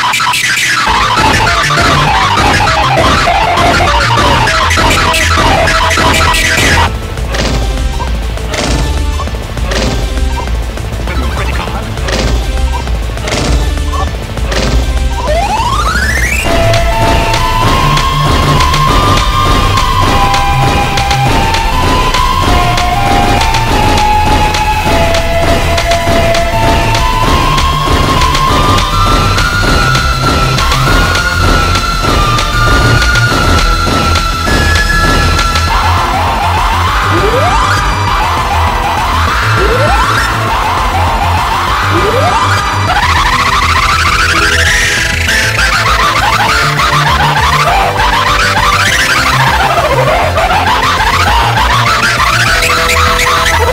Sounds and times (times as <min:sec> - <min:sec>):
Music: 0:00.0 - 0:53.7
Speech: 0:11.1 - 0:11.9.